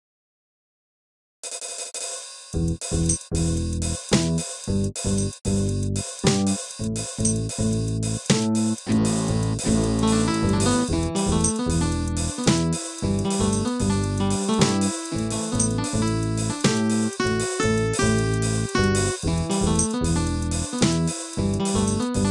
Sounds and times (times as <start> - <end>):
Music: 1.5 - 22.3.